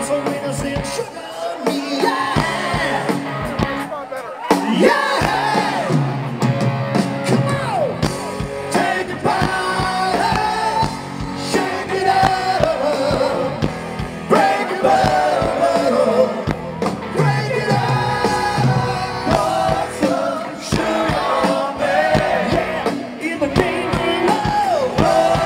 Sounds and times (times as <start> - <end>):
Music: 0.0 - 25.4
Speech: 3.4 - 4.6.